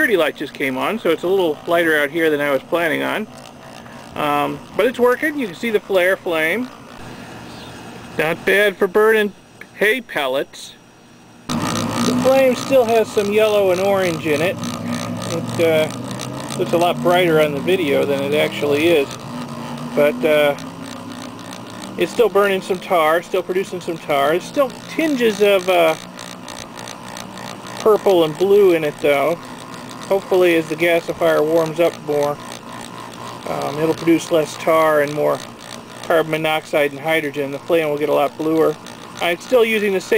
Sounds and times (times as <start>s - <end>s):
Speech: 0.0s - 3.3s, 4.2s - 6.7s, 8.2s - 10.8s, 12.1s - 14.6s, 15.3s - 15.9s, 16.6s - 19.2s, 20.0s - 20.6s, 22.0s - 26.0s, 27.8s - 29.4s, 30.1s - 32.4s, 33.5s - 35.4s, 36.1s - 40.1s.